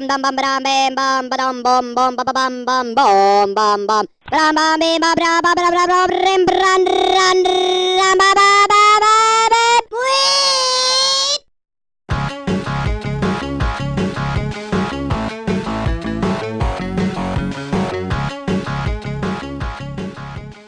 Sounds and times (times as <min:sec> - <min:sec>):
Music: 0:12.1 - 0:20.6.